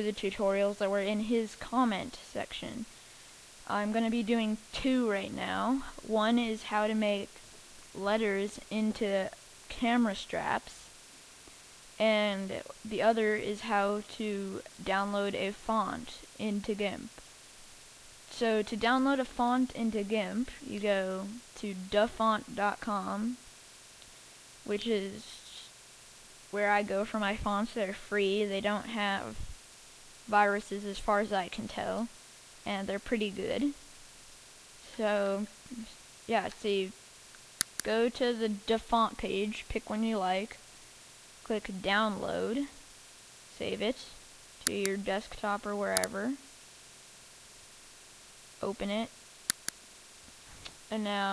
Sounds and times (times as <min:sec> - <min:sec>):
Speech: 0:00.0 - 0:02.9, 0:03.7 - 0:07.4, 0:08.0 - 0:10.9, 0:12.0 - 0:17.2, 0:18.3 - 0:23.4, 0:24.7 - 0:25.7, 0:26.6 - 0:29.4, 0:30.3 - 0:32.1, 0:32.7 - 0:33.8, 0:34.9 - 0:37.0, 0:37.8 - 0:40.6, 0:41.5 - 0:42.8, 0:43.6 - 0:46.4, 0:48.6 - 0:49.1, 0:50.9 - 0:51.3.